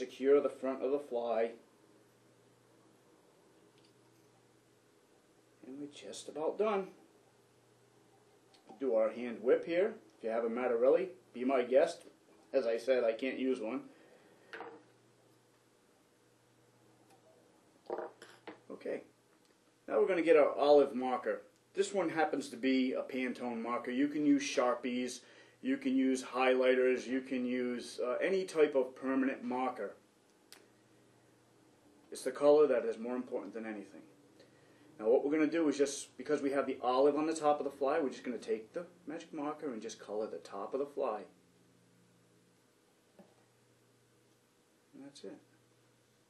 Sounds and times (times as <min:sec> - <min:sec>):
Speech: 0:00.0 - 0:01.6, 0:05.6 - 0:07.0, 0:08.7 - 0:13.9, 0:18.7 - 0:19.1, 0:19.9 - 0:30.0, 0:32.1 - 0:34.2, 0:35.0 - 0:41.4, 0:44.9 - 0:45.5.